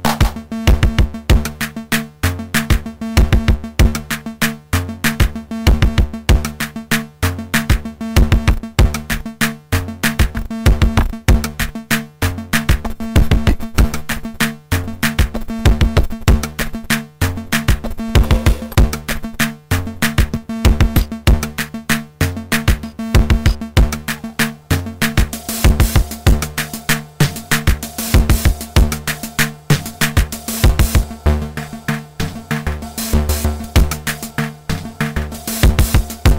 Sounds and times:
Drum machine: 17.8 - 36.3
Synthesizer: 17.8 - 36.3
Electronica: 18.0 - 19.1, 23.5 - 36.3.

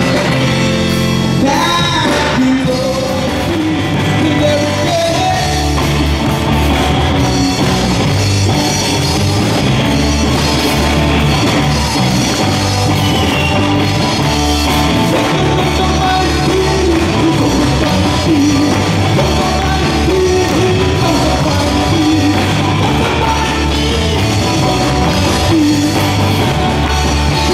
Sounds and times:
Gospel music: 0.0 - 27.5.

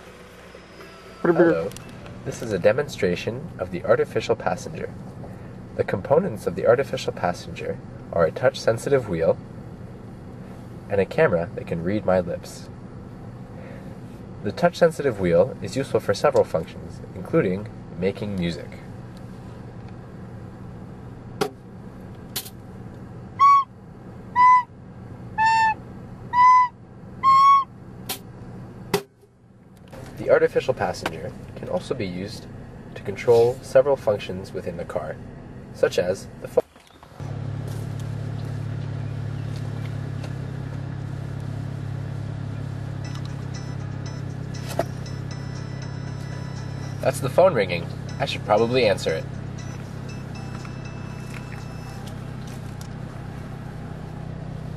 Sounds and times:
Speech: 1.3 - 5.0, 5.8 - 9.4, 10.9 - 12.7, 14.4 - 18.9, 30.2 - 35.2, 35.8 - 36.7, 47.0 - 49.3.

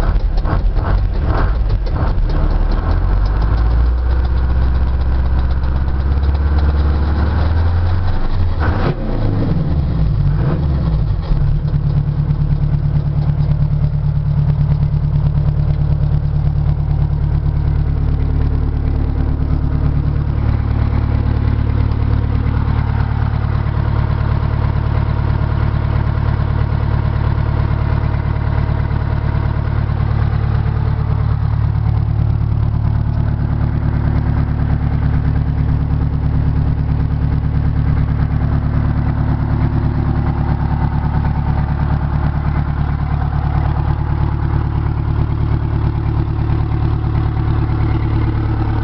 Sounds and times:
Vehicle: 0.0 - 48.8.

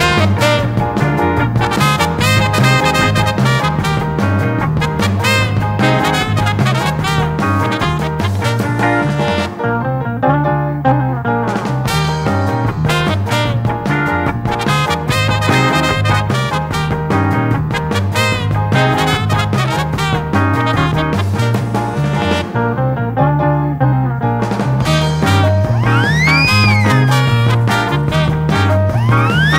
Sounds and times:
Music: 0.0 - 29.5.

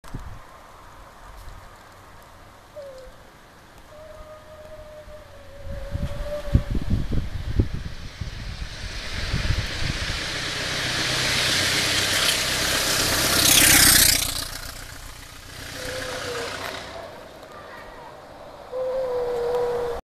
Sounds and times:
Motorcycle: 5.3 - 18.7.

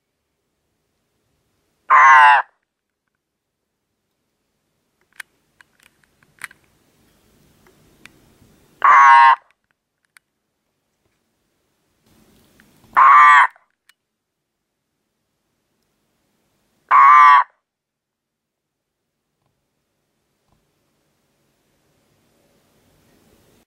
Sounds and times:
Frog: 1.9 - 2.5, 8.8 - 9.5, 13.0 - 13.7, 16.9 - 17.6.

